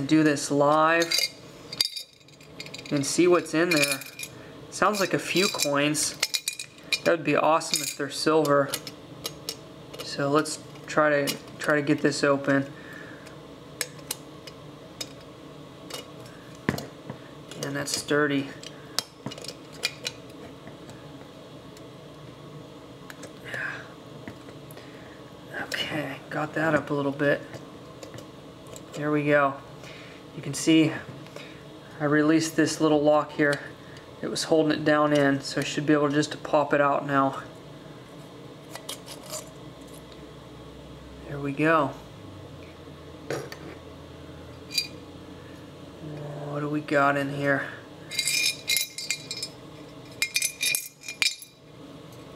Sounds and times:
Speech: 0.0 - 1.2, 2.9 - 4.0, 4.8 - 6.2, 7.1 - 8.8, 10.0 - 12.7, 17.6 - 18.6, 25.5 - 27.5, 29.0 - 29.6, 30.4 - 31.1, 32.0 - 37.5, 41.2 - 42.0, 46.0 - 47.8.

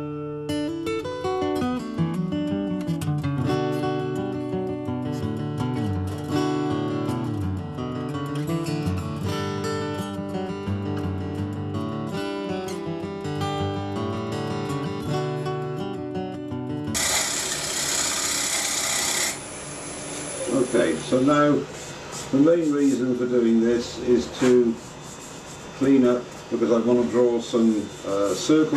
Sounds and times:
Power tool: 17.0 - 21.2
Rub: 24.4 - 26.2.

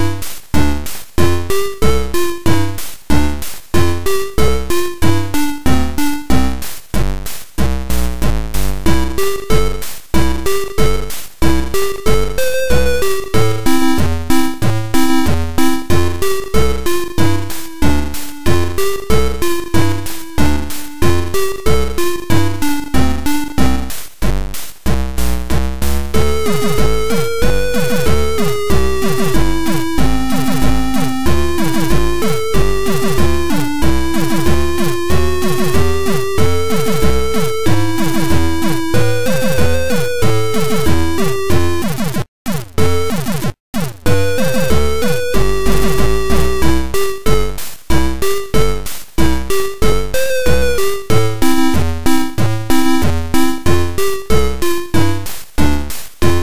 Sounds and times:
Exciting music: 8.0 - 24.0, 25.2 - 41.9, 43.9 - 48.8.

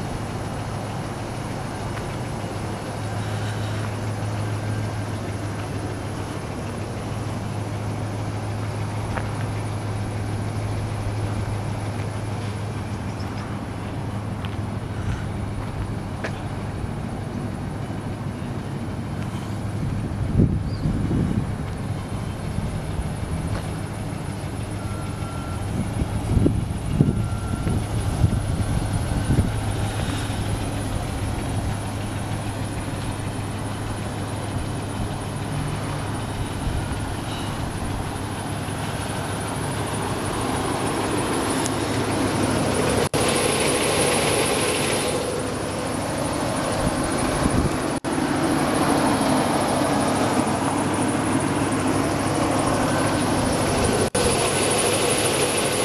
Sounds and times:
Vehicle: 0.0 - 55.8.

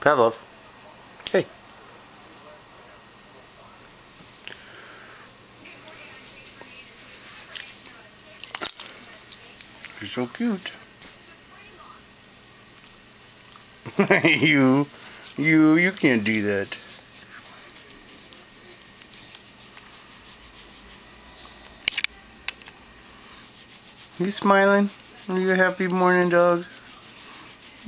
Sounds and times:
Speech: 5.6 - 12.1, 14.3 - 18.8, 24.2 - 27.8.

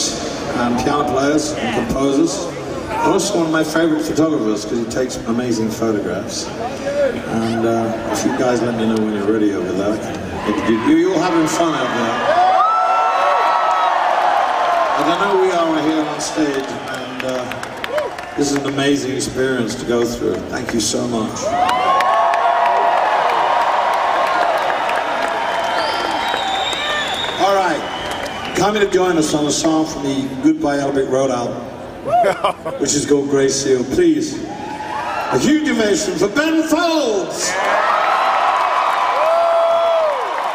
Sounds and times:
Speech: 0.0 - 12.2, 15.0 - 17.6, 18.4 - 21.5, 28.6 - 31.6, 32.8 - 34.4, 35.4 - 37.6.

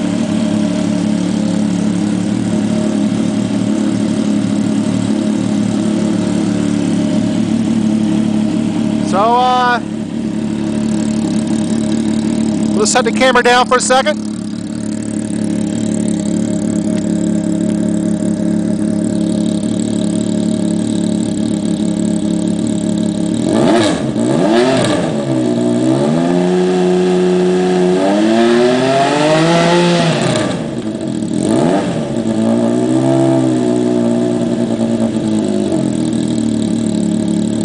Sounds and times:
Engine: 0.0 - 37.6
Vehicle: 0.0 - 37.6
Speech: 9.0 - 9.9, 12.8 - 14.2.

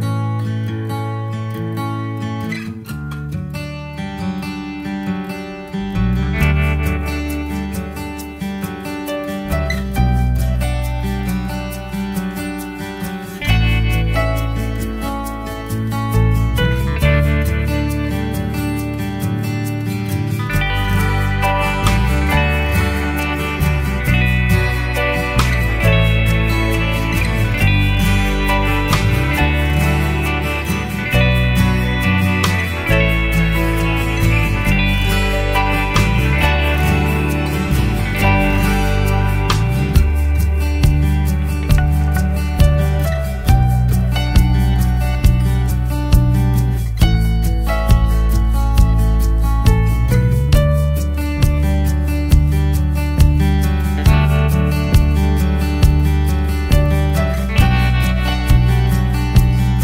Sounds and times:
Music: 0.0 - 59.8.

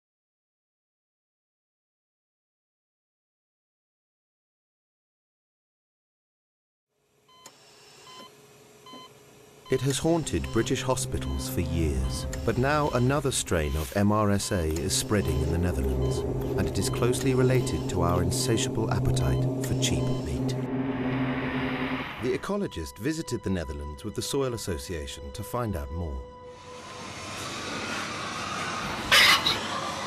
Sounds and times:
Speech: 9.7 - 20.6, 22.2 - 26.3
Music: 9.7 - 21.2, 21.8 - 27.9.

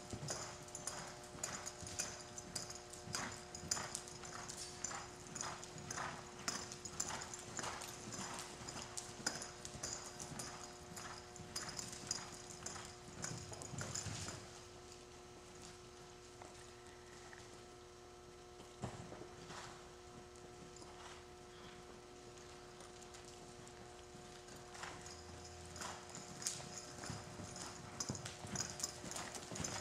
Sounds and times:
Clip-clop: 0.0 - 29.8.

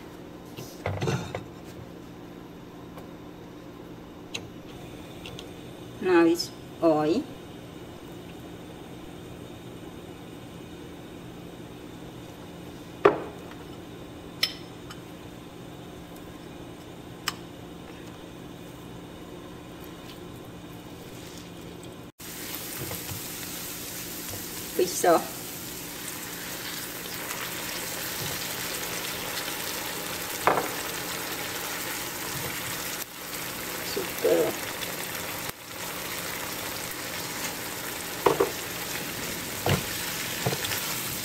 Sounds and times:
Frying (food): 18.3 - 41.2
Sizzle: 19.6 - 41.2.

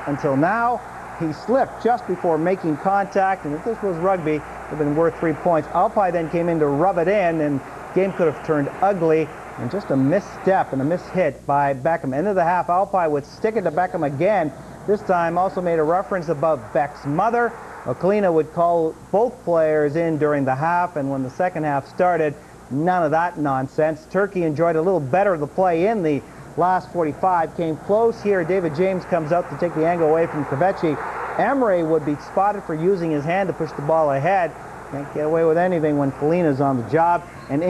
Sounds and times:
Speech: 0.0 - 37.7.

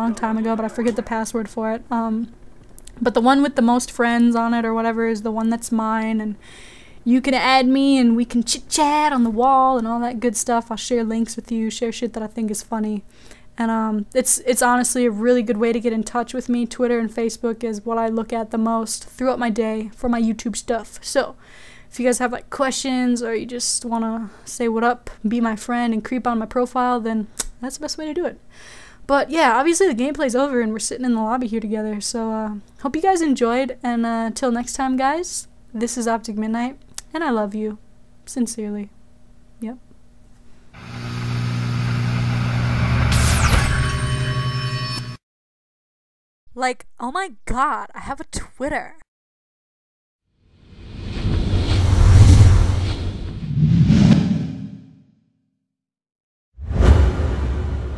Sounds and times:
Speech: 0.0 - 2.3, 2.9 - 6.4, 7.1 - 13.0, 13.6 - 28.4, 29.1 - 38.9, 39.6 - 39.8, 46.5 - 49.0.

